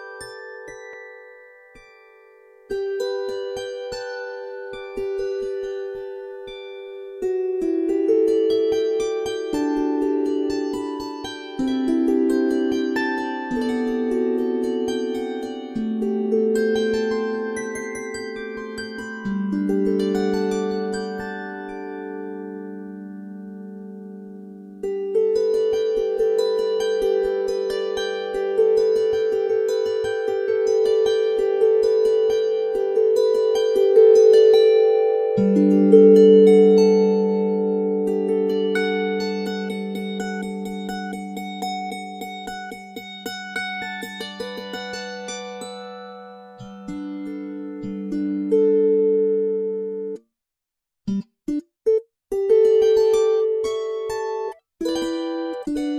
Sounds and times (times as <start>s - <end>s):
Zither: 0.0s - 50.2s, 52.4s - 55.9s.